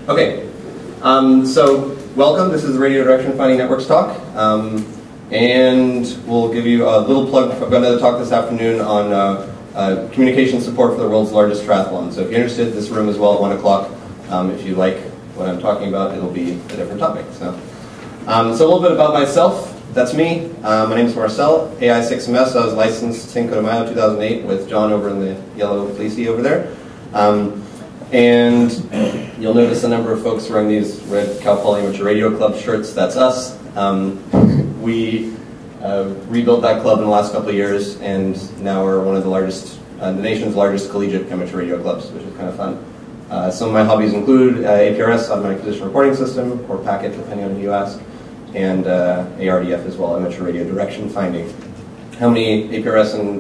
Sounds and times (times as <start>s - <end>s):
Speech: 0.0s - 53.4s.